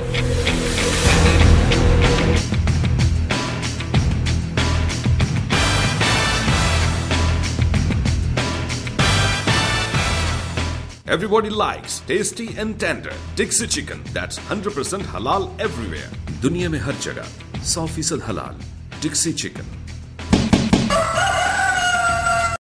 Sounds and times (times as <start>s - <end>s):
Music: 0.0s - 22.6s
Speech: 11.1s - 19.8s.